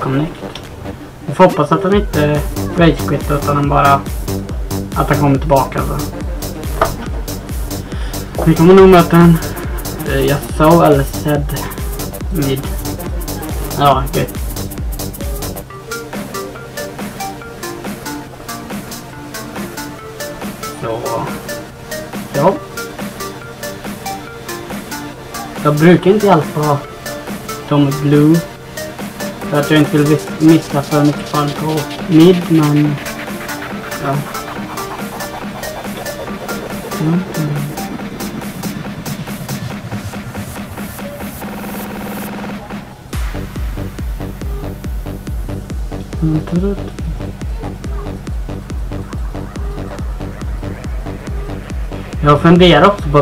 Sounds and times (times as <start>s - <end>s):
Speech: 0.0s - 0.4s, 1.3s - 4.0s, 5.0s - 6.1s, 8.4s - 11.7s, 12.3s - 12.7s, 13.6s - 14.3s, 20.8s - 21.4s, 22.3s - 22.6s, 25.6s - 26.8s, 27.7s - 28.5s, 29.5s - 33.0s, 34.0s - 34.3s, 37.0s - 37.8s, 46.2s - 47.2s, 52.2s - 53.2s
Music: 0.0s - 53.2s.